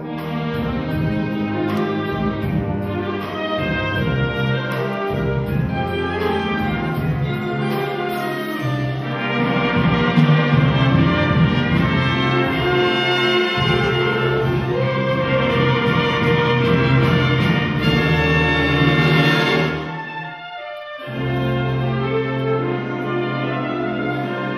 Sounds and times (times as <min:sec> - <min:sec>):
Orchestra: 0:00.0 - 0:24.5.